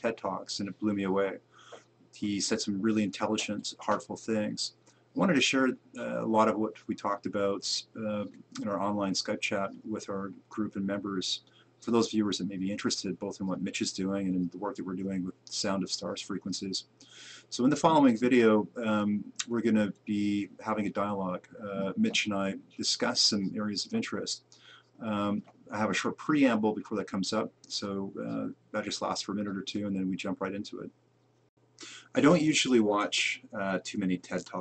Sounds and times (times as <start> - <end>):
Speech: 0.0 - 1.4, 2.2 - 16.9, 17.5 - 24.4, 25.0 - 30.9, 31.8 - 34.6.